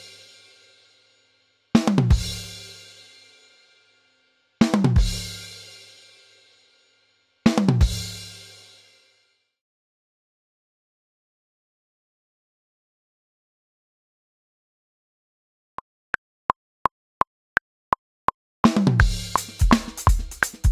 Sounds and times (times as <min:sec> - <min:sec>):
Inside, small room: 0:00.0 - 0:09.6, 0:18.7 - 0:20.7.